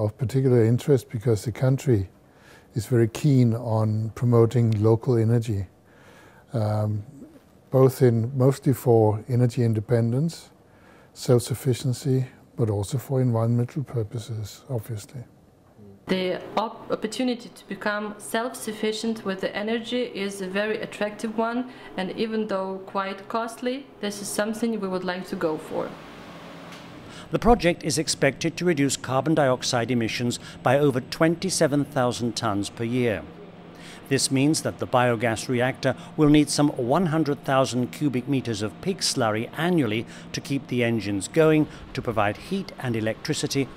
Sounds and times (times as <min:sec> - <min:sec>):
Speech: 0:00.0 - 0:02.1, 0:02.8 - 0:05.7, 0:06.5 - 0:10.6, 0:11.2 - 0:26.0, 0:27.3 - 0:33.3, 0:34.1 - 0:43.7.